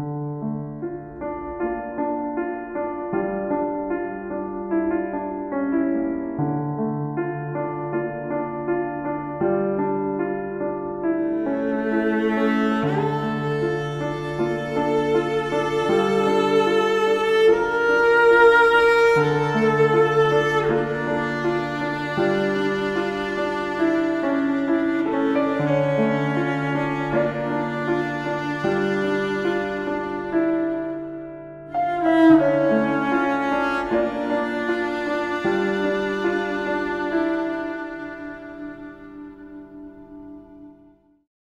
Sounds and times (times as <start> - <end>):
Music: 0.0 - 41.3.